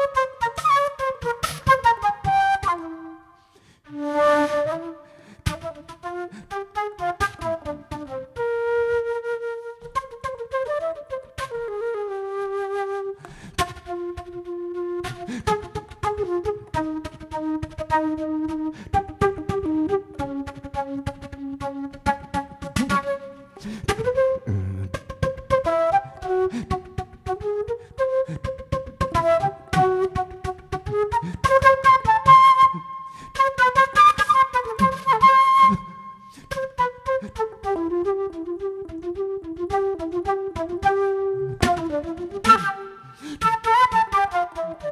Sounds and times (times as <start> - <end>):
Flute: 0.0 - 44.9.